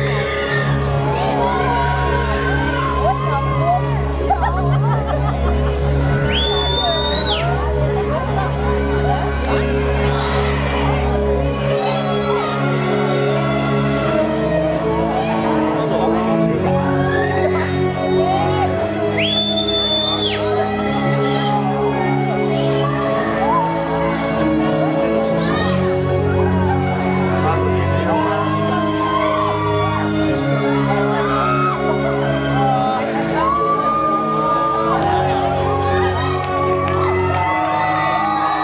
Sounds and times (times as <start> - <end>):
Music: 0.0 - 38.6
Speech: 6.8 - 12.3, 26.8 - 28.9.